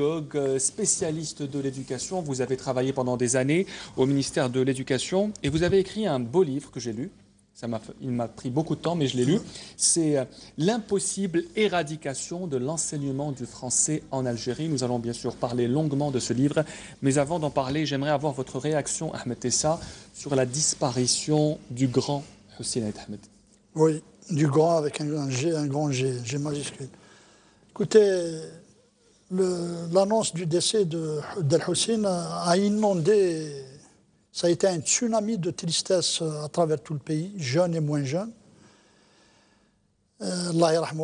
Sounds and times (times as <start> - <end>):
Speech: 0.0 - 26.9, 27.8 - 28.7, 29.3 - 38.4, 40.2 - 41.0.